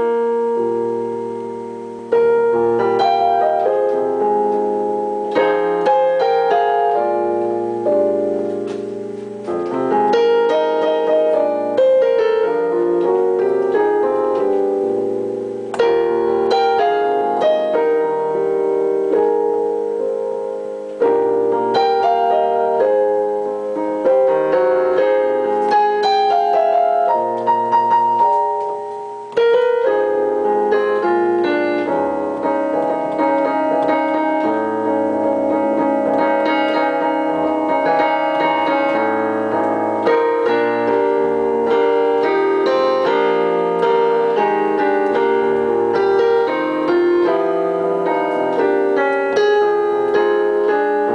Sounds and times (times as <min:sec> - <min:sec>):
Music: 0:00.0 - 0:51.1.